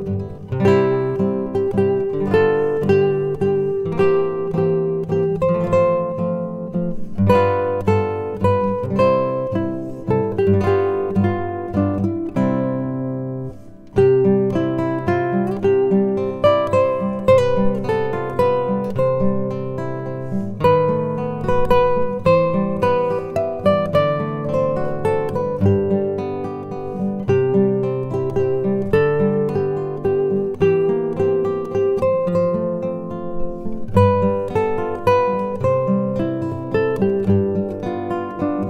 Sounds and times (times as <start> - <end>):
Music: 0.0 - 38.7.